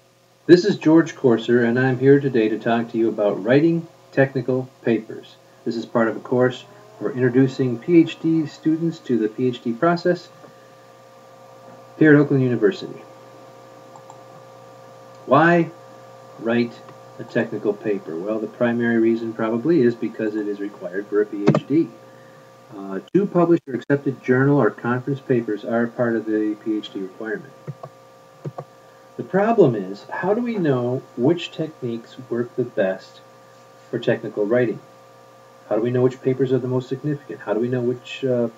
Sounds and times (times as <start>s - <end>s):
Speech: 0.5s - 10.4s, 12.0s - 13.1s, 15.3s - 15.8s, 16.4s - 22.0s, 22.7s - 27.6s, 29.2s - 33.3s, 33.9s - 34.9s, 35.7s - 38.5s.